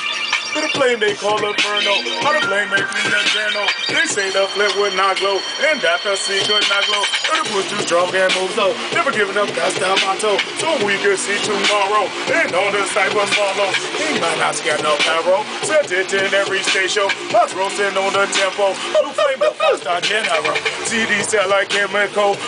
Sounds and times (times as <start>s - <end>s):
Music: 0.0s - 22.4s.